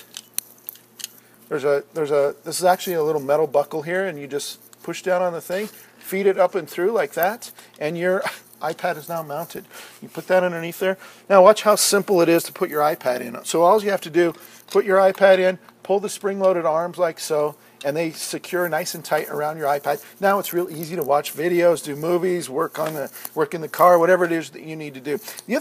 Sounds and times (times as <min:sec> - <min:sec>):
Speech: 0:01.5 - 0:25.6.